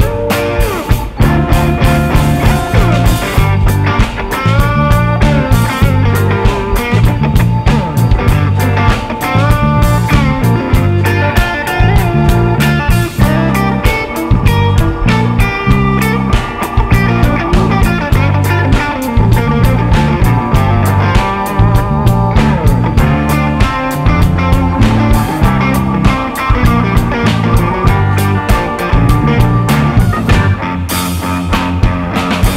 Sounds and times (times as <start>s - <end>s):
Blues: 0.0s - 32.5s
Electric guitar: 0.0s - 32.5s
Strum: 0.0s - 32.5s.